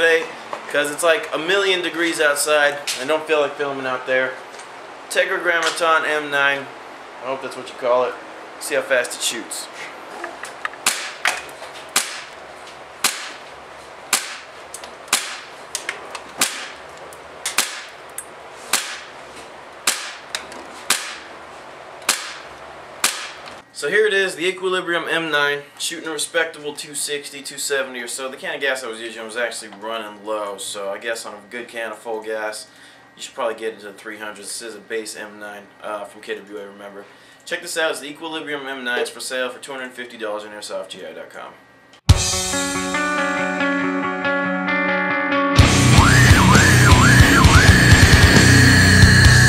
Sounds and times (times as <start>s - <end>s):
Speech: 0.0s - 4.4s, 5.1s - 9.9s, 23.8s - 41.6s.